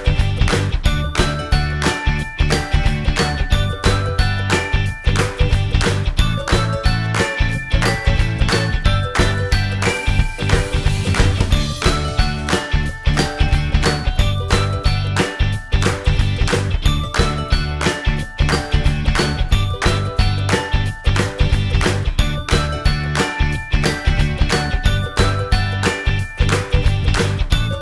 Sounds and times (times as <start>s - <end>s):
Music: 0.0s - 27.8s.